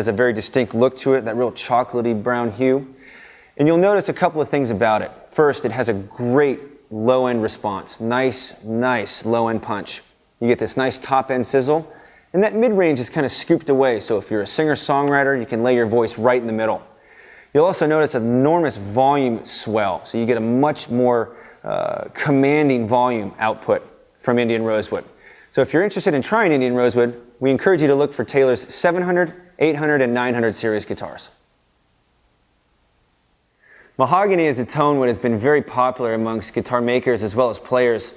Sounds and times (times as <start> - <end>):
Speech: 0.0 - 3.0, 3.6 - 16.9, 17.5 - 31.4, 34.0 - 38.1.